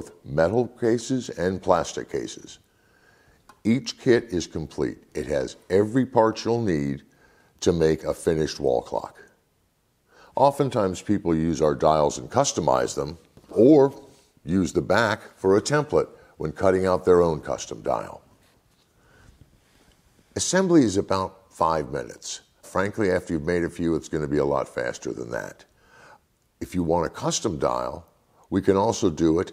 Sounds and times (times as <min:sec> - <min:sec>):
Speech: 0:00.0 - 0:02.7, 0:03.6 - 0:09.4, 0:10.4 - 0:18.3, 0:20.4 - 0:25.7, 0:26.6 - 0:29.5.